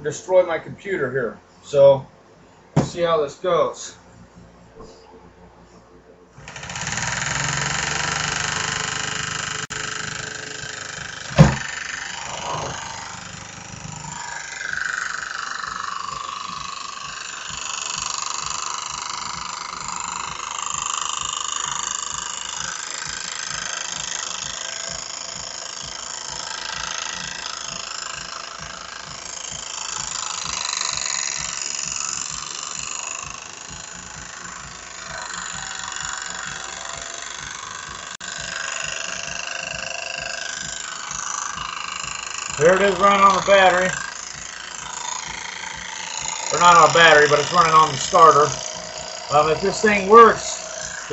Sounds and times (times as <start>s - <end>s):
Engine: 2.8s - 51.1s.